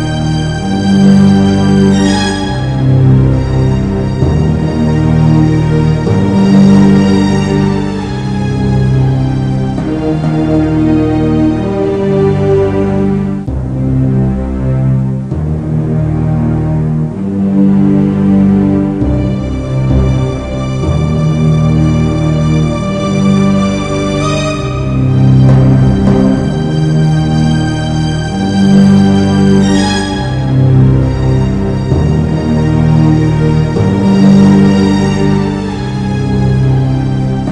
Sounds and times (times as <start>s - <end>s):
Background music: 0.0s - 37.5s.